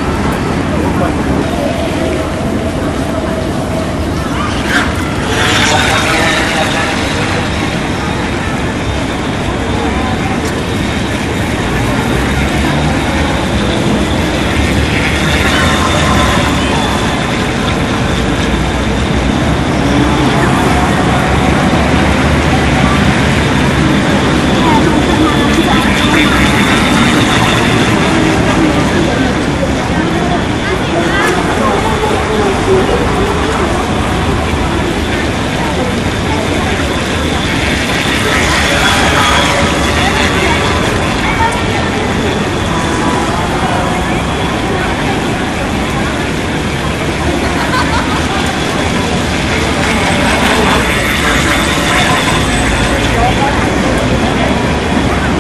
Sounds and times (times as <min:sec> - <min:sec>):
Motorboat, speedboat: 0:00.0 - 0:55.4
Speech: 0:00.0 - 0:55.4.